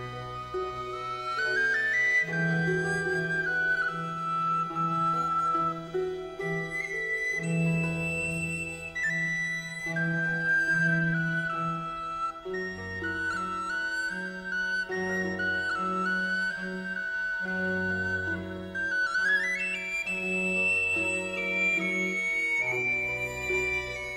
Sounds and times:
Music: 0.0 - 24.1.

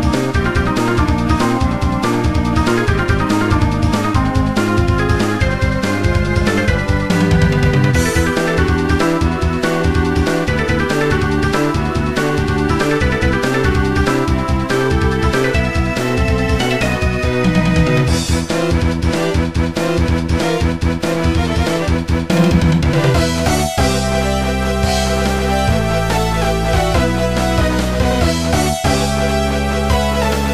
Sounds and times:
Music: 0.0 - 30.5.

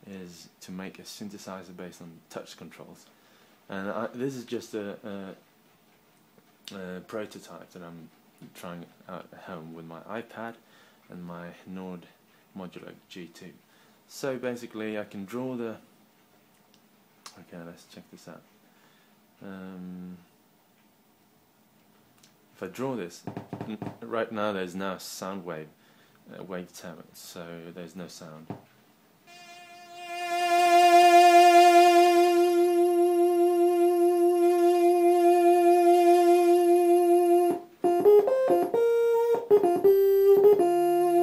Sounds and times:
Speech: 0.0 - 3.1, 3.7 - 5.4, 6.7 - 15.9, 17.3 - 18.5, 19.4 - 20.3, 22.6 - 28.6.

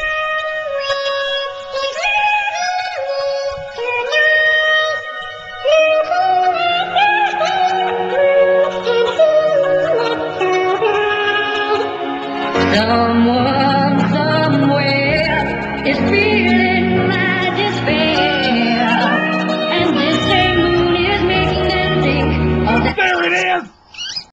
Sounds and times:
Female singing: 0.0 - 11.9, 12.6 - 22.9
Music: 0.0 - 23.2
Speech: 22.7 - 23.7.

